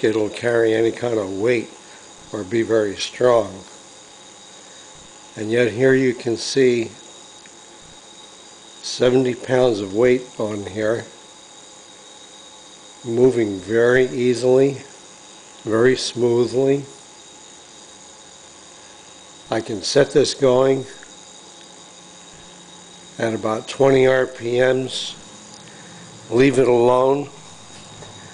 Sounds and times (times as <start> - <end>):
Speech: 0.0 - 3.7, 5.4 - 7.0, 8.8 - 11.2, 13.0 - 14.9, 15.7 - 17.0, 19.5 - 21.0, 23.2 - 25.2, 26.3 - 27.4
Power tool: 0.0 - 28.3.